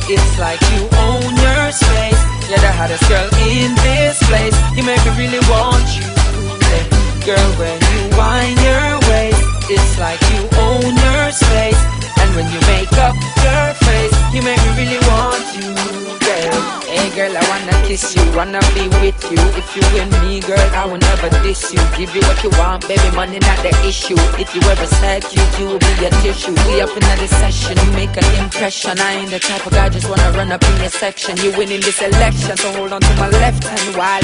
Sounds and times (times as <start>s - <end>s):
Music: 0.0s - 34.2s.